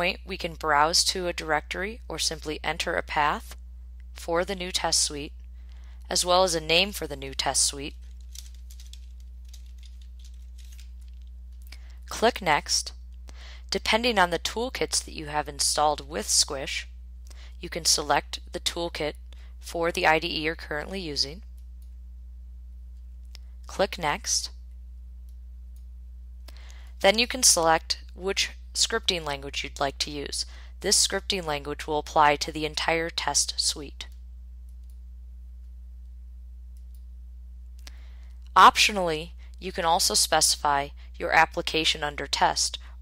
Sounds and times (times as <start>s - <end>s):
Speech: 0.0s - 3.6s, 4.2s - 5.3s, 6.1s - 7.9s, 12.1s - 12.9s, 13.7s - 16.9s, 17.6s - 21.4s, 23.7s - 24.5s, 27.0s - 34.1s, 38.6s - 42.8s.